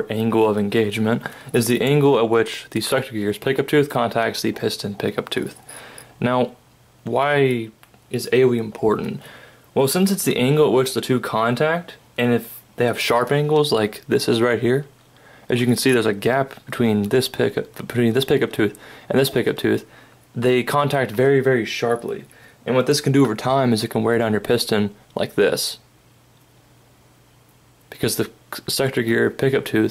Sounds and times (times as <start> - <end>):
Speech: 0.0 - 5.6, 6.2 - 14.9, 15.5 - 25.9, 27.9 - 29.9.